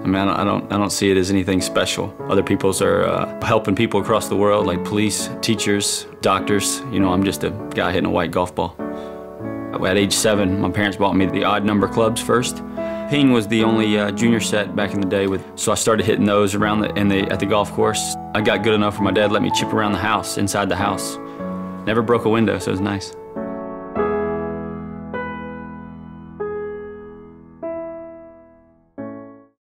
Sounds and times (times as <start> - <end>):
Speech: 0.0 - 8.8, 9.7 - 21.2, 21.8 - 23.2
Music: 0.0 - 29.6.